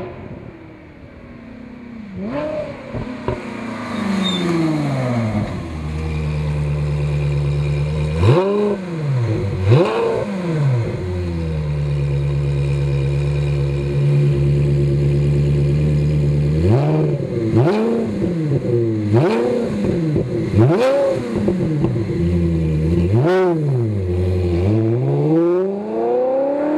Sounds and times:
Car: 0.0 - 26.7
Outside, urban or manmade: 0.0 - 26.7
Accelerating, revving, vroom: 2.2 - 5.6, 8.1 - 11.1, 16.5 - 22.0, 22.9 - 26.7.

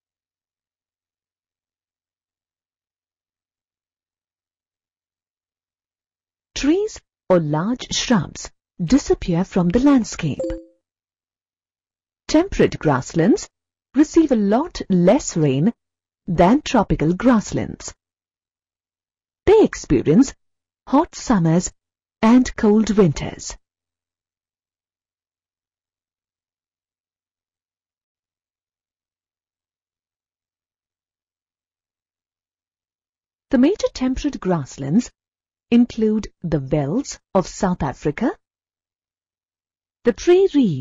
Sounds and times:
Speech: 6.6 - 10.6, 12.3 - 18.0, 19.5 - 23.6, 33.6 - 35.1, 35.8 - 38.4, 40.1 - 40.8.

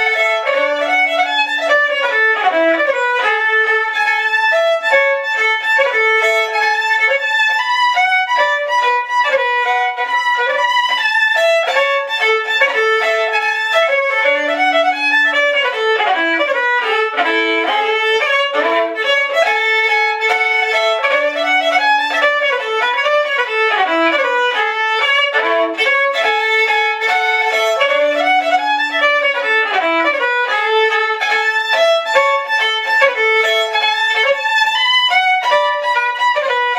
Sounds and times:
Violin, fiddle: 0.0 - 36.7.

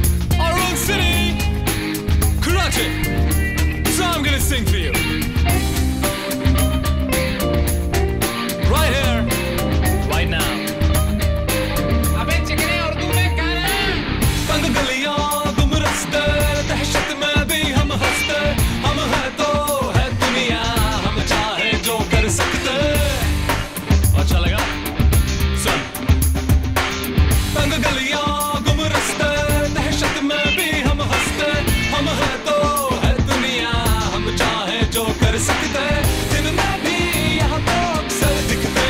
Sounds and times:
Music: 0.0 - 38.9.

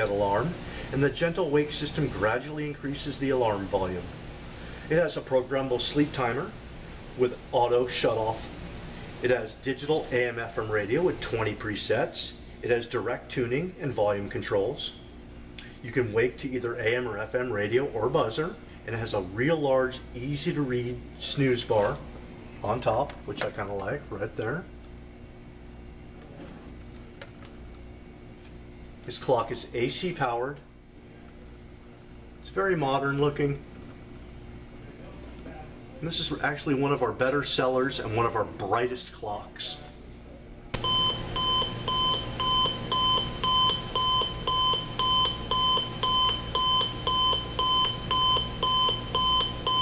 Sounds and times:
Speech: 0.0 - 4.1, 4.9 - 6.6, 7.2 - 8.5, 9.2 - 15.0, 15.8 - 24.8, 29.0 - 30.7, 32.4 - 33.6, 34.8 - 40.5.

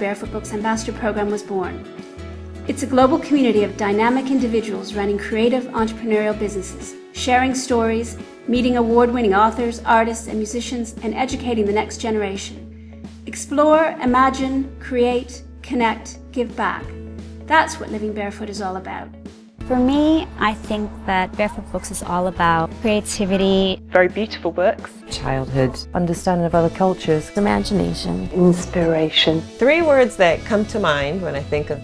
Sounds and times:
Music: 0.0 - 31.8
Speech: 2.7 - 12.6, 19.7 - 31.8.

